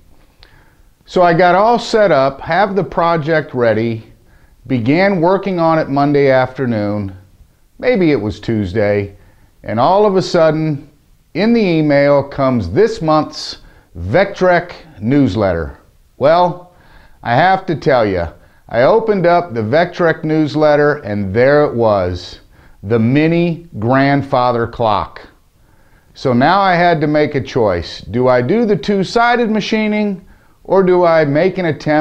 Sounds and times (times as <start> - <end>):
Speech: 1.1 - 7.2, 7.8 - 25.4, 26.2 - 32.0.